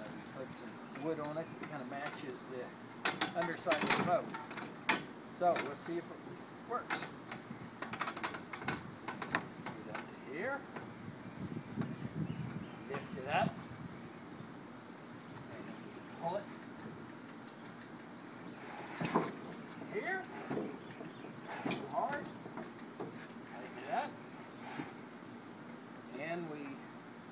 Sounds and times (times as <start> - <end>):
Speech: 0.0 - 2.8, 3.4 - 4.3, 5.4 - 7.0, 12.9 - 13.6, 15.5 - 16.5, 19.9 - 20.3, 21.8 - 22.3, 26.1 - 26.9.